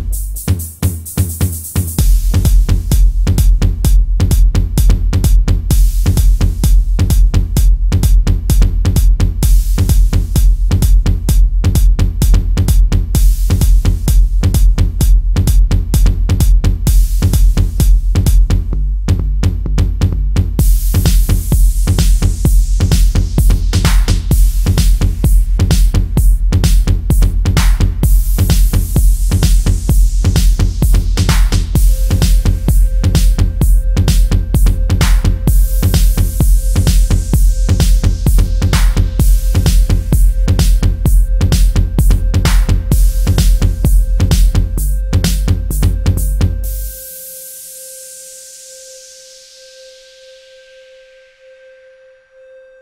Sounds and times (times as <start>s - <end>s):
Dubstep: 0.0s - 16.1s, 20.6s - 50.6s
Electronic dance music: 0.0s - 18.5s, 20.6s - 49.6s
House music: 0.0s - 18.8s, 20.6s - 50.6s
Techno: 0.0s - 19.2s, 20.5s - 49.6s
Trance music: 1.9s - 18.4s, 20.6s - 52.8s
Electronica: 20.6s - 52.8s.